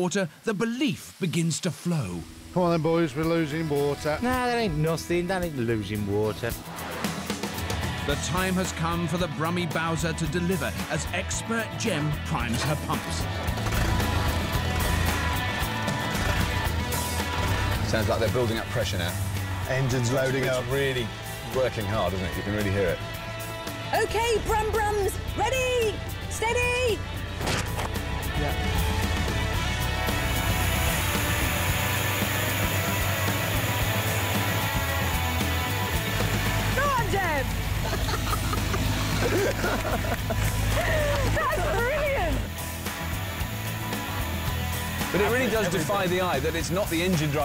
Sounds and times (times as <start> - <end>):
Speech: 0.0 - 6.6, 8.1 - 13.3, 17.9 - 23.0, 45.1 - 47.4
Music: 1.9 - 47.4.